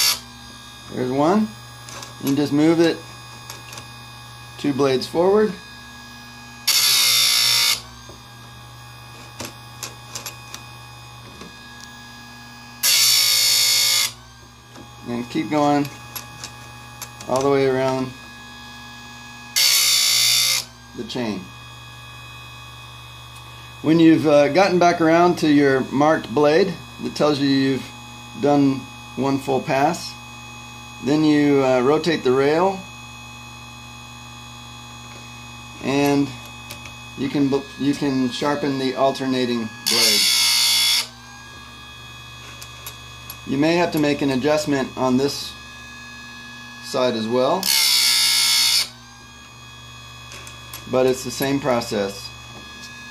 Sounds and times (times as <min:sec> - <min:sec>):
Speech: 0:00.9 - 0:01.6, 0:02.2 - 0:03.1, 0:04.6 - 0:05.6, 0:15.0 - 0:15.9, 0:17.2 - 0:18.2, 0:21.0 - 0:21.5, 0:23.8 - 0:30.2, 0:31.0 - 0:32.9, 0:35.8 - 0:36.4, 0:37.2 - 0:40.2, 0:43.5 - 0:45.6, 0:46.8 - 0:47.7, 0:50.9 - 0:52.4.